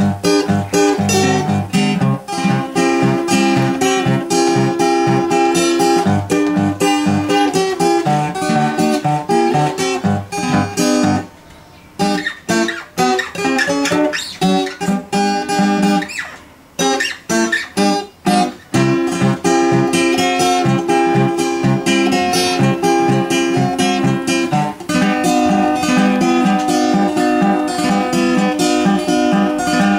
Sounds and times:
Acoustic guitar: 0.0s - 29.9s
Strum: 0.0s - 29.9s.

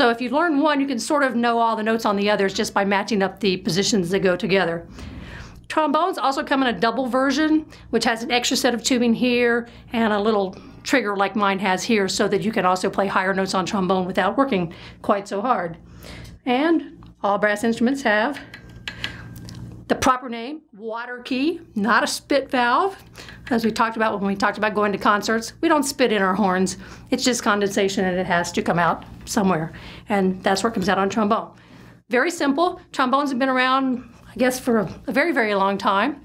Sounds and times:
Speech: 0.0s - 4.9s, 5.7s - 15.8s, 16.4s - 18.5s, 19.9s - 36.2s.

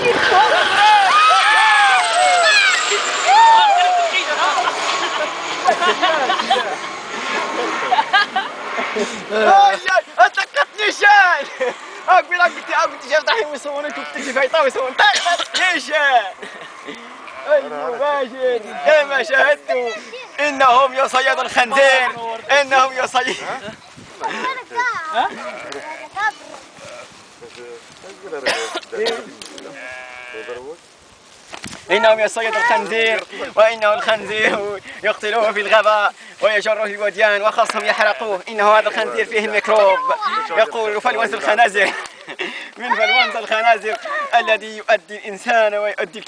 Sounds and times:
Sheep: 25.2s - 27.2s.

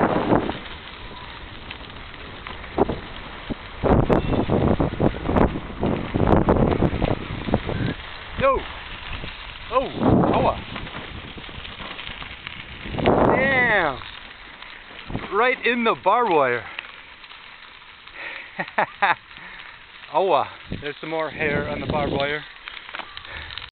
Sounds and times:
Speech: 9.7s - 10.6s, 13.3s - 14.0s, 15.3s - 16.7s, 20.1s - 22.5s.

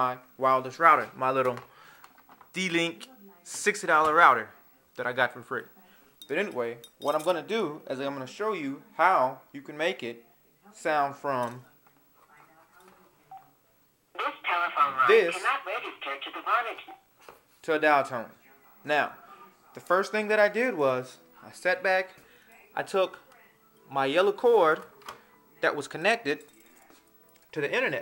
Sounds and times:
Speech: 14.2s - 16.9s
Telephone: 14.2s - 17.0s.

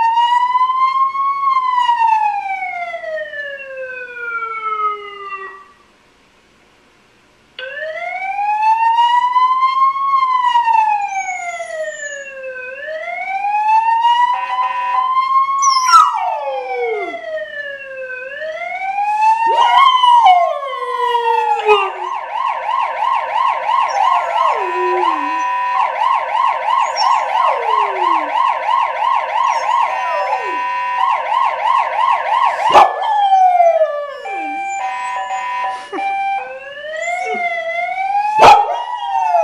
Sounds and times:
Ambulance (siren): 0.0s - 5.9s, 7.6s - 39.4s.

